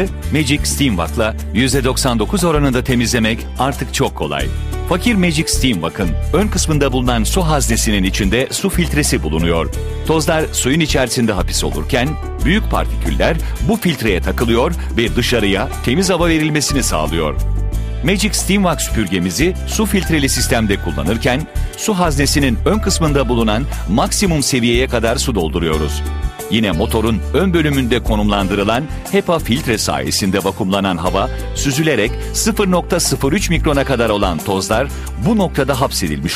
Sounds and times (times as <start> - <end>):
Speech: 0.0 - 17.4, 18.0 - 36.3
Music: 0.0 - 36.3.